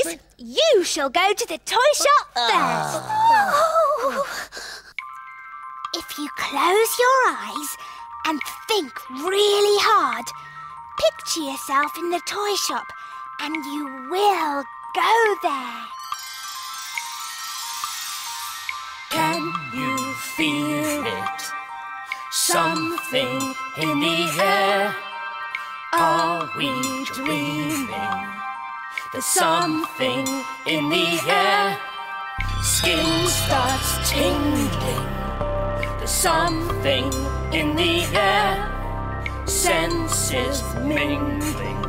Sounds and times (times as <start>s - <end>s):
Speech: 0.0s - 3.8s, 6.0s - 10.3s, 11.0s - 12.8s, 13.4s - 15.9s
Music: 4.3s - 41.8s
Jingle, tinkle: 5.0s - 41.8s.